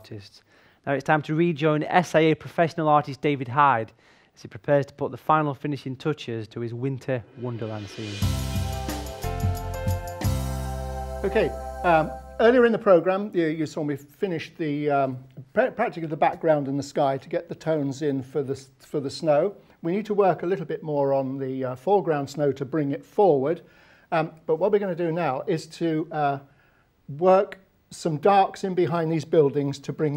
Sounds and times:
Speech: 0.0s - 8.2s, 11.2s - 26.5s, 27.1s - 30.1s.

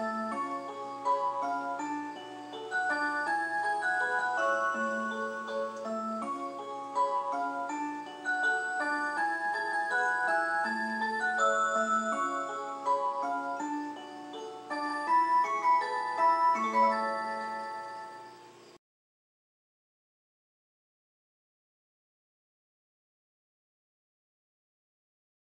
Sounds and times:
Music: 0.0s - 18.8s.

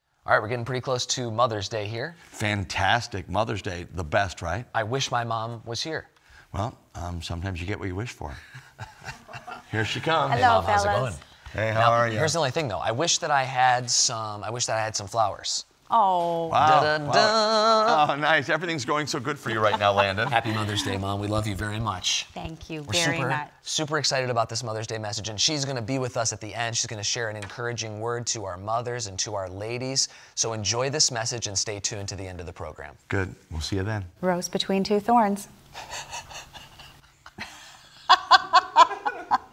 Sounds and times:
Speech: 22.7s - 29.6s.

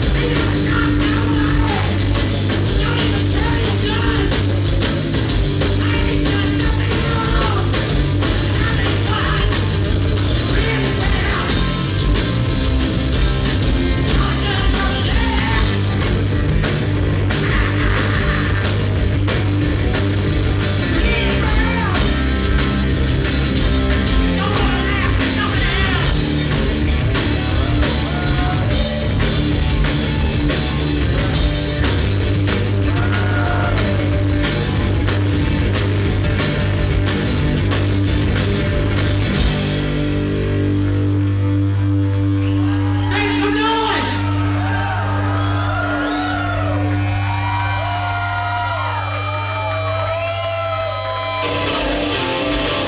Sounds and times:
Music: 0.0s - 52.8s.

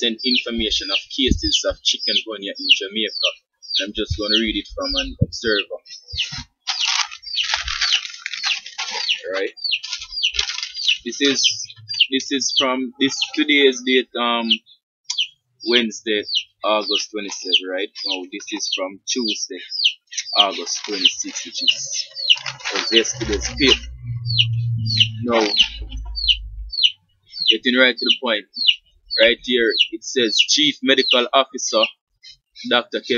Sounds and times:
Speech: 0.0s - 6.2s, 9.2s - 9.6s, 11.1s - 14.6s, 15.7s - 26.3s, 27.5s - 33.1s.

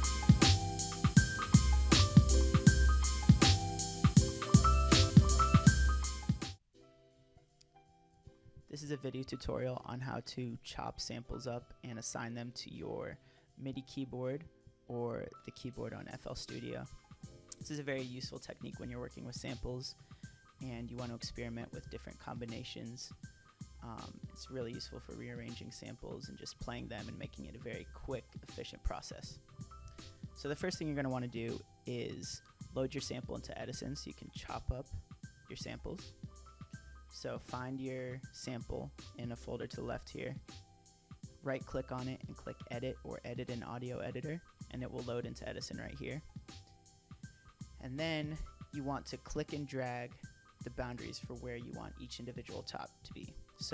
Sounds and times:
Speech: 8.7s - 17.0s, 17.6s - 20.0s, 20.6s - 23.2s, 23.8s - 29.4s, 30.4s - 36.1s, 37.1s - 40.4s, 41.4s - 46.2s, 47.8s - 53.7s.

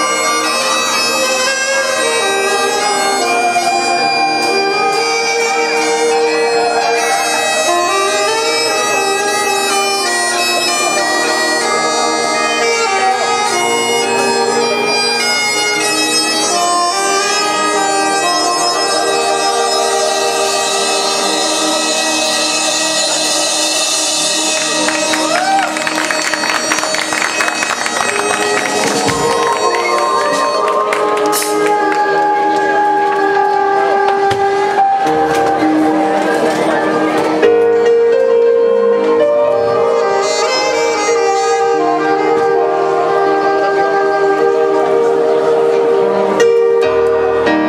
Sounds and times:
Brass instrument: 0.0s - 47.6s
Saxophone: 0.0s - 47.6s.

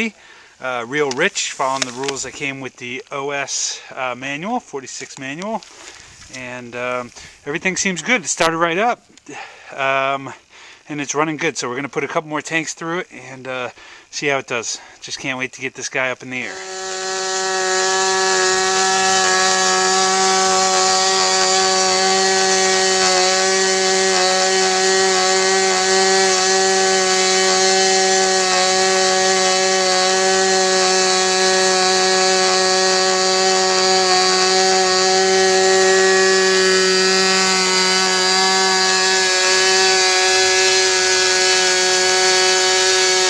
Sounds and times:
Speech: 0.0s - 5.6s, 6.3s - 9.0s, 9.8s - 16.5s.

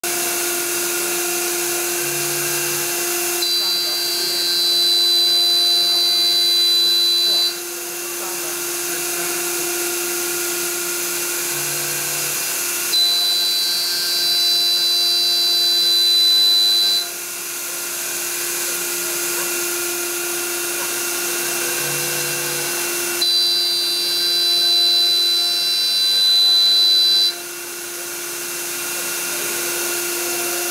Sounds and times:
Inside, large room or hall: 0.1s - 30.7s
Speech: 7.3s - 9.4s.

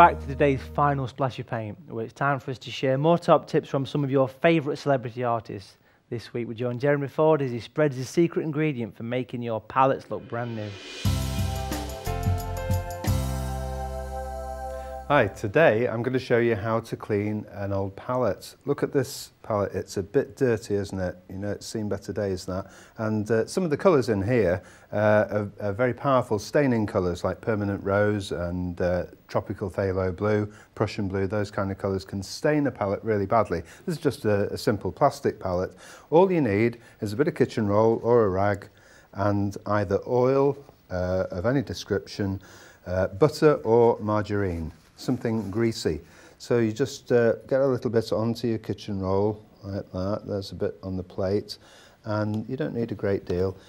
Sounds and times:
Speech: 0.0s - 10.9s, 15.1s - 53.6s.

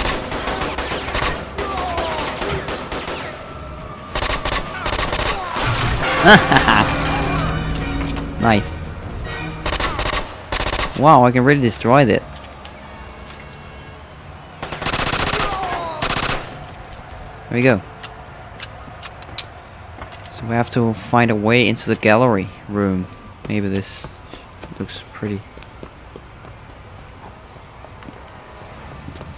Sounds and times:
Outside, urban or manmade: 0.0s - 29.3s
Music: 6.0s - 10.0s.

